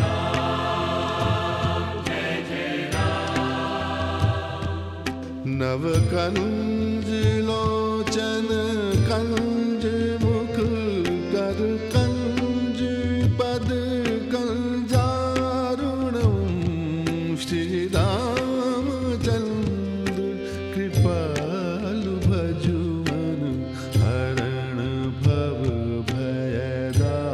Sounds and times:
Carnatic music: 0.0s - 27.3s.

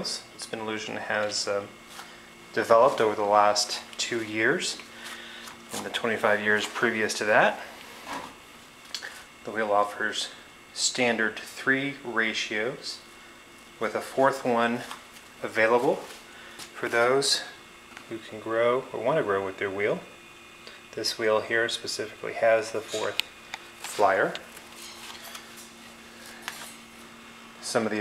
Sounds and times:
Speech: 0.0s - 1.8s, 2.5s - 4.9s, 5.7s - 7.7s, 9.4s - 13.1s, 13.8s - 16.2s, 16.8s - 20.2s, 20.9s - 23.2s, 23.9s - 24.5s, 27.6s - 28.0s.

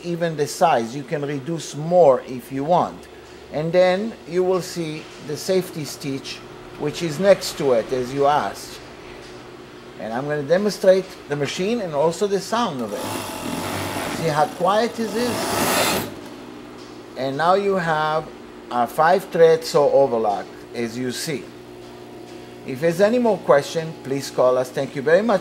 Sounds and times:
Speech: 0.0s - 8.8s, 10.0s - 13.1s, 14.2s - 15.5s, 17.2s - 21.5s, 22.7s - 25.4s
Sewing machine: 12.9s - 16.2s.

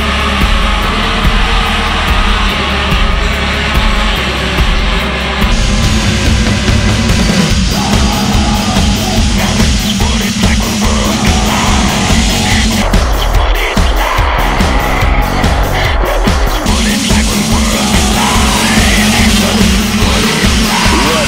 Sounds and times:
Vehicle: 0.0s - 13.3s
Music: 0.0s - 21.2s
Outside, urban or manmade: 0.0s - 21.2s.

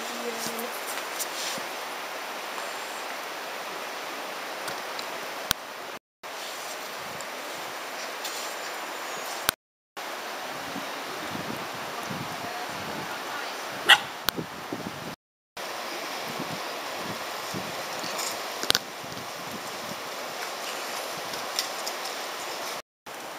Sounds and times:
Outside, rural or natural: 0.0s - 23.3s
Dog: 13.9s - 14.2s.

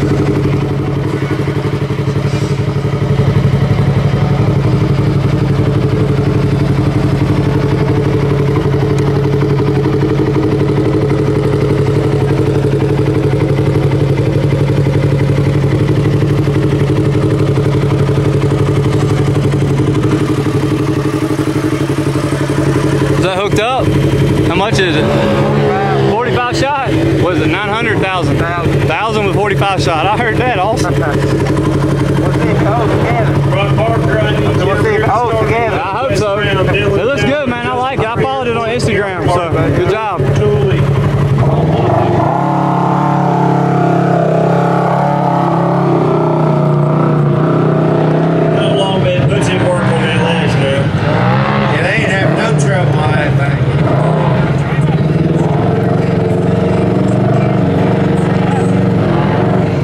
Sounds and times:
Outside, rural or natural: 0.0s - 59.8s
Vehicle: 0.0s - 59.8s.

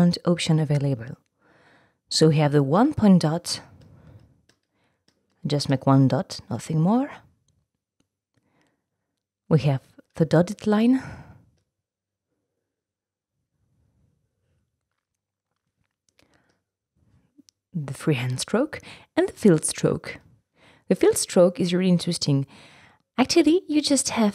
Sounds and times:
Speech: 0.0s - 1.2s, 2.1s - 3.7s, 5.5s - 7.2s, 9.5s - 11.1s, 17.8s - 20.2s, 20.9s - 22.5s, 23.2s - 24.3s.

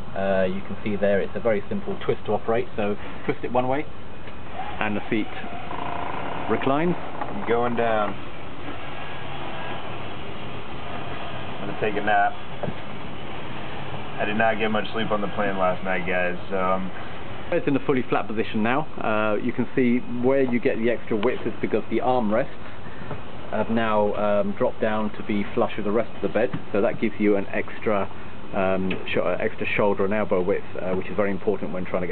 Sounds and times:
Vehicle: 0.0s - 32.1s
Speech: 0.2s - 3.9s, 4.8s - 5.5s, 6.5s - 8.2s, 11.6s - 12.4s, 14.2s - 22.6s, 23.5s - 32.1s.

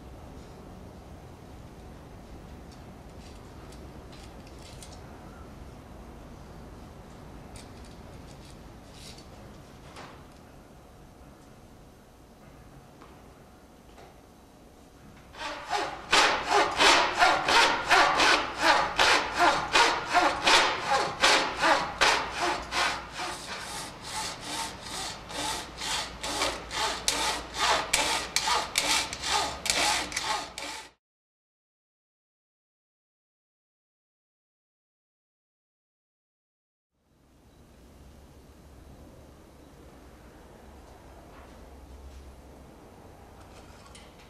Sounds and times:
Sawing: 15.4s - 31.0s
Wood: 15.4s - 31.0s.

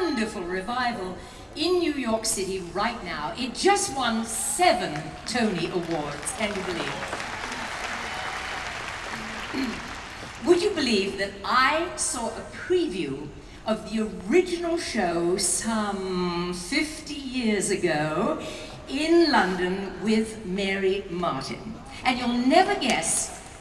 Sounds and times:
Speech: 0.0s - 7.1s, 10.4s - 23.4s.

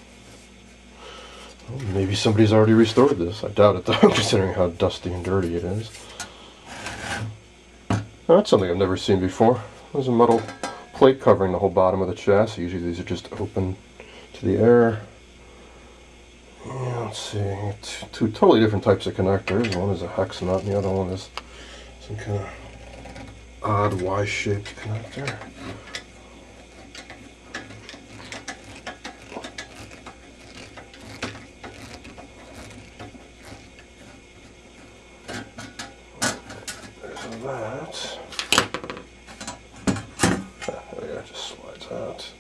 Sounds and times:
Speech: 1.7s - 6.0s, 8.3s - 13.8s, 14.4s - 15.1s, 16.6s - 21.3s, 22.0s - 22.6s, 23.6s - 25.5s, 37.0s - 38.3s, 40.7s - 42.4s.

